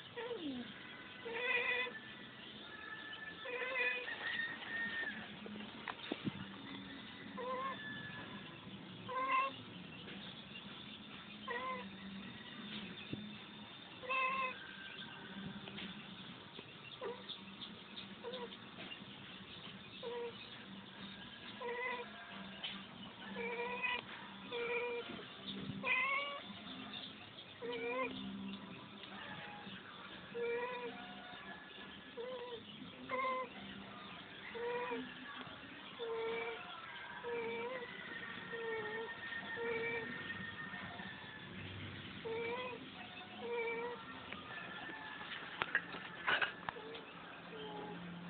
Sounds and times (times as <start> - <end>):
Meow: 0.2 - 0.6, 1.2 - 2.0, 3.4 - 5.1, 7.4 - 8.2, 9.1 - 9.6, 11.5 - 11.9, 14.0 - 14.8, 17.0 - 17.3, 18.2 - 18.5, 20.0 - 20.4, 21.6 - 22.2, 23.3 - 25.2, 25.8 - 26.5, 27.6 - 28.2, 30.4 - 31.1, 32.2 - 33.5, 34.6 - 35.1, 36.0 - 37.9, 38.5 - 40.3, 42.2 - 42.8, 43.4 - 44.1, 46.8 - 48.0.